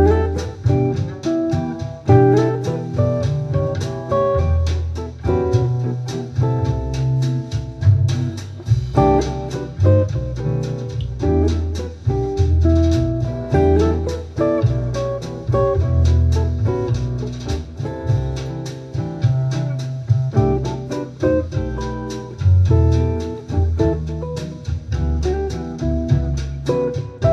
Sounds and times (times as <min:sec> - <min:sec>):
Acoustic guitar: 0:00.0 - 0:27.3
Strum: 0:00.0 - 0:27.3.